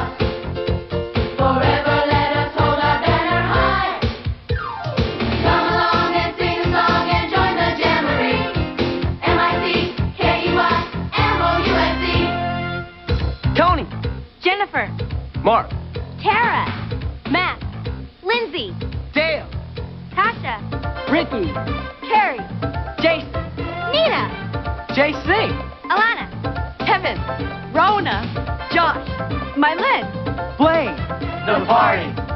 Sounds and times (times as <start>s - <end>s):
Music: 0.0s - 32.3s.